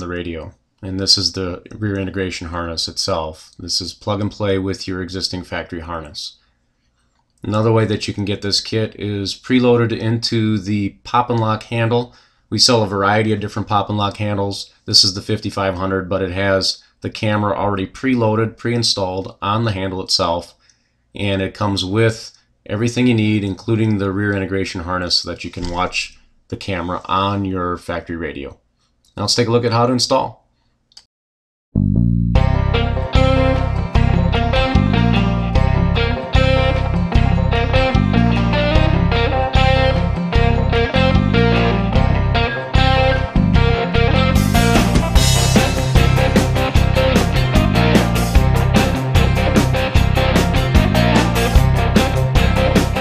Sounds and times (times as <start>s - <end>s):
Speech: 0.0s - 6.4s, 7.4s - 20.6s, 21.2s - 28.6s, 29.2s - 30.4s.